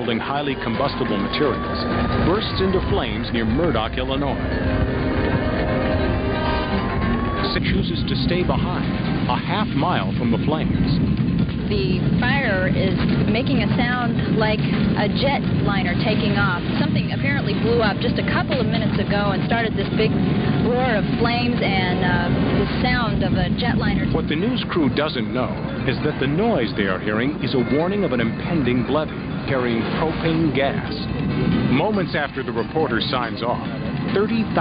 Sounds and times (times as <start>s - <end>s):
Speech: 0.0s - 4.4s, 7.5s - 11.0s, 11.7s - 20.1s, 20.7s - 31.1s, 31.7s - 34.6s.